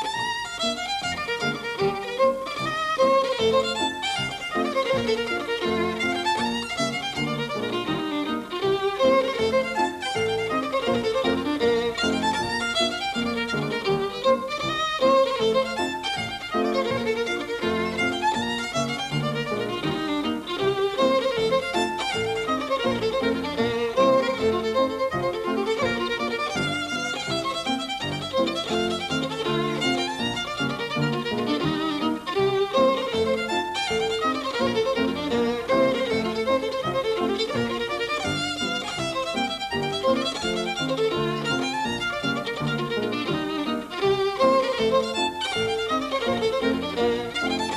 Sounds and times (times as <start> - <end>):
Violin, fiddle: 0.0 - 47.7.